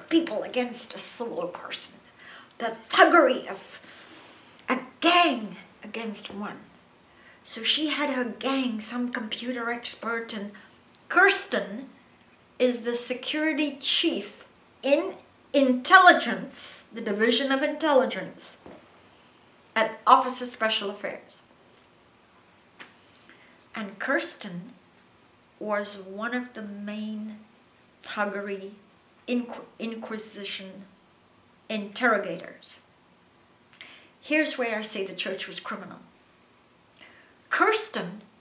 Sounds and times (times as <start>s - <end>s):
Speech: 0.0s - 2.0s, 2.6s - 3.8s, 4.7s - 6.7s, 7.5s - 12.0s, 12.6s - 18.6s, 19.8s - 21.4s, 23.8s - 24.8s, 25.6s - 27.5s, 28.1s - 30.9s, 31.7s - 32.8s, 34.3s - 36.1s, 37.5s - 38.3s.